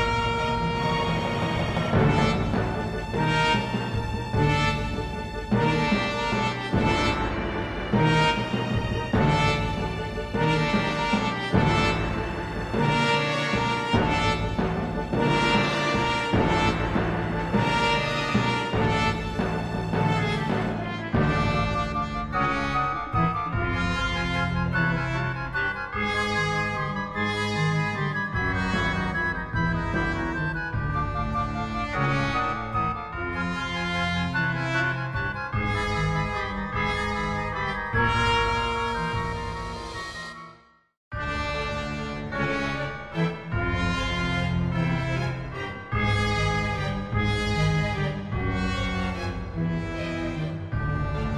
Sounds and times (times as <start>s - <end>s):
Music: 0.0s - 51.3s.